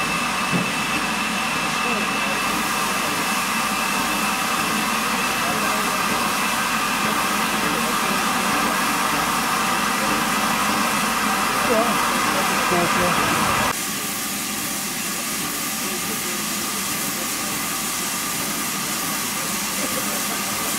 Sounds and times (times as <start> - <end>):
Railroad car, train wagon: 0.0 - 20.7
Train: 0.0 - 20.7
Speech: 1.7 - 3.4, 4.9 - 13.8, 15.0 - 20.7.